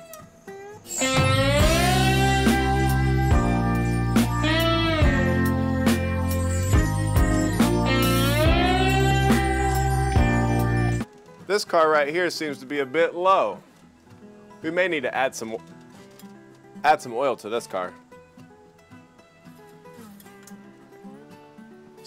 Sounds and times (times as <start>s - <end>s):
Music: 0.0s - 22.0s
Speech: 11.5s - 13.6s, 14.6s - 15.6s, 16.8s - 18.0s.